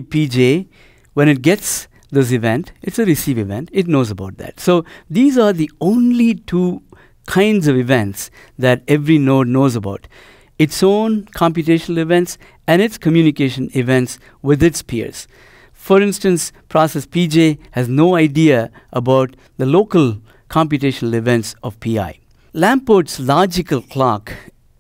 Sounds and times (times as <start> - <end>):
Speech: 0.0 - 24.5.